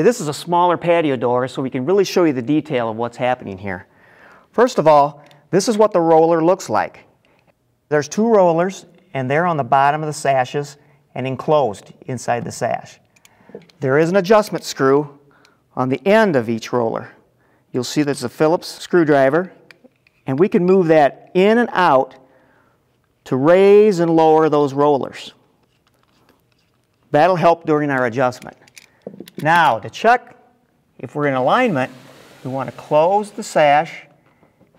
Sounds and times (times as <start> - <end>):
Speech: 0.0 - 3.9, 4.6 - 7.0, 7.9 - 13.0, 13.8 - 15.2, 15.8 - 17.2, 17.8 - 19.6, 20.3 - 22.2, 23.3 - 25.4, 27.1 - 28.6, 29.4 - 30.4, 31.0 - 34.2.